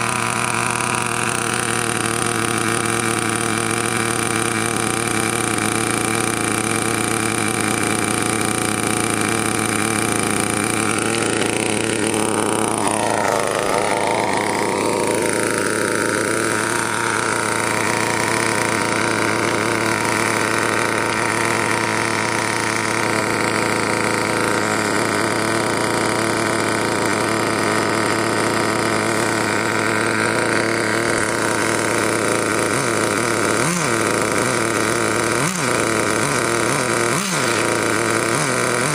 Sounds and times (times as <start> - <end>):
Medium engine (mid frequency): 0.0 - 38.9
Vehicle: 0.0 - 38.9.